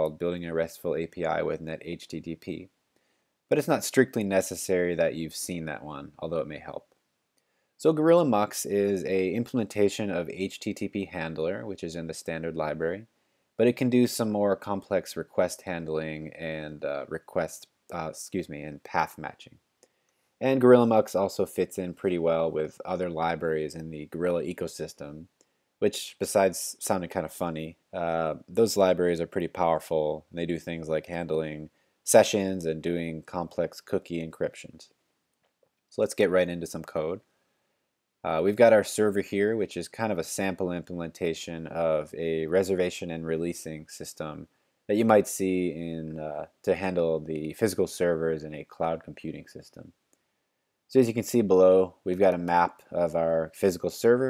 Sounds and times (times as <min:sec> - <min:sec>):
Speech: 0:00.0 - 0:02.7, 0:03.5 - 0:06.9, 0:07.8 - 0:19.6, 0:20.4 - 0:35.0, 0:35.9 - 0:37.3, 0:38.2 - 0:50.0, 0:50.9 - 0:54.3.